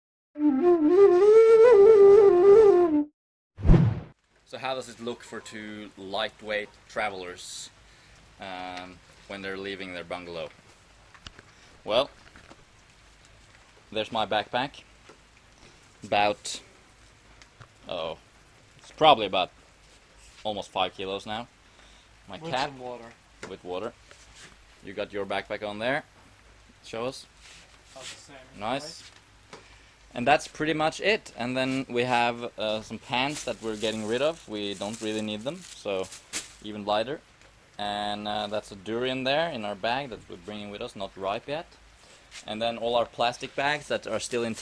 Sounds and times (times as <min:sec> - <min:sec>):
Flute: 0:00.4 - 0:03.1
Speech: 0:04.5 - 0:07.8, 0:08.4 - 0:10.5, 0:11.9 - 0:12.1, 0:13.9 - 0:14.8, 0:16.0 - 0:16.6, 0:17.8 - 0:18.2, 0:18.9 - 0:19.5, 0:20.4 - 0:21.5, 0:22.3 - 0:24.0, 0:24.8 - 0:26.1, 0:26.8 - 0:27.3, 0:28.0 - 0:29.1, 0:30.1 - 0:37.2, 0:37.8 - 0:41.8, 0:42.4 - 0:44.6.